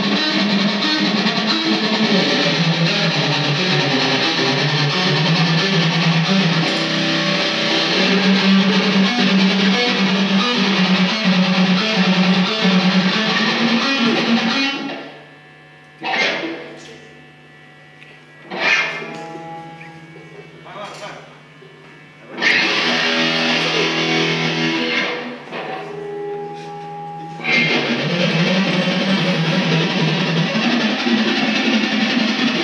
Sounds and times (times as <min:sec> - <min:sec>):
Music: 0:00.0 - 0:15.2, 0:18.0 - 0:20.6, 0:22.3 - 0:32.6
Speech: 0:16.2 - 0:17.3, 0:19.8 - 0:22.0.